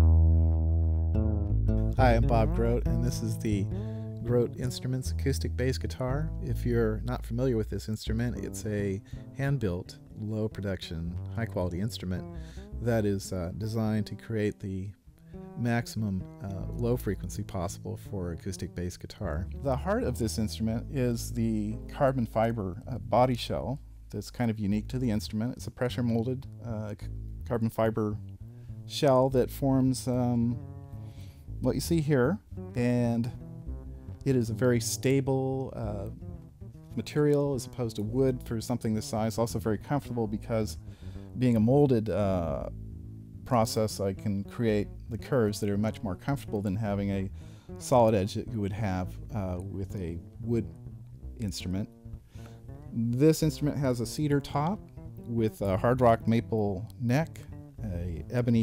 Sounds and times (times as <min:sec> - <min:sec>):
Guitar: 0:00.0 - 0:23.8, 0:24.7 - 0:58.6
Speech: 0:02.0 - 0:15.0, 0:15.6 - 0:28.2, 0:28.9 - 0:30.6, 0:31.6 - 0:33.4, 0:34.2 - 0:36.2, 0:37.0 - 0:40.8, 0:41.4 - 0:42.8, 0:43.5 - 0:50.8, 0:51.4 - 0:51.9, 0:52.9 - 0:58.6.